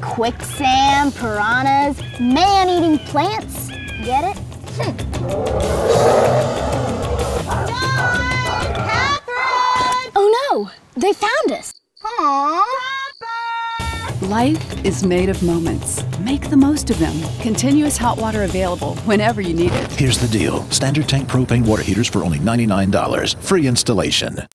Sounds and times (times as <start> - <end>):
Music: 0.4 - 9.0, 13.8 - 21.8
Speech: 14.2 - 24.5.